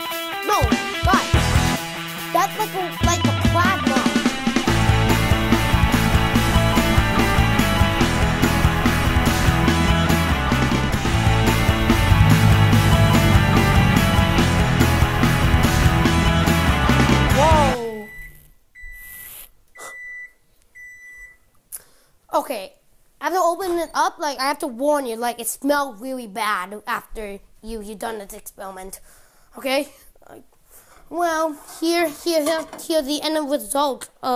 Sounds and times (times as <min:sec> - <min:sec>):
Music: 0:00.0 - 0:17.8
Speech: 0:00.5 - 0:01.3, 0:02.3 - 0:04.2, 0:17.4 - 0:18.1, 0:22.3 - 0:29.0, 0:29.6 - 0:30.5, 0:31.1 - 0:34.3.